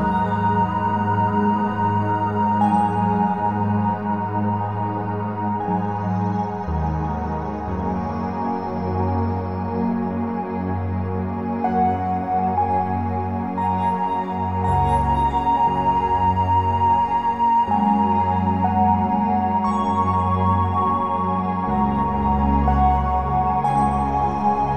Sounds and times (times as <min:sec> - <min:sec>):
New-age music: 0:00.0 - 0:24.7.